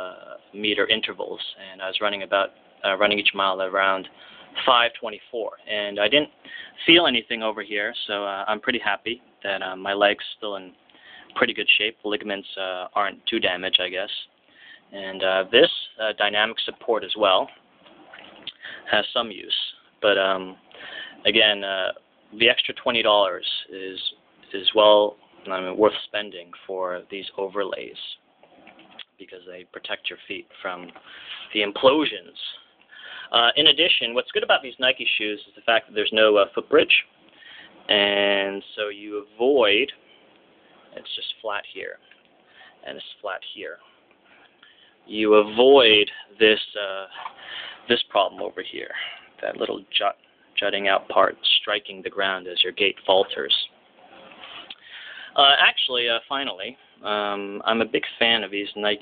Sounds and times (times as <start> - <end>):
Speech: 0.0 - 14.3, 14.9 - 17.5, 18.5 - 20.6, 21.2 - 28.2, 29.0 - 32.6, 33.3 - 37.1, 37.9 - 40.0, 40.9 - 42.1, 42.8 - 43.9, 45.1 - 47.3, 47.9 - 54.3, 55.4 - 59.0
Inside, small room: 0.0 - 59.0.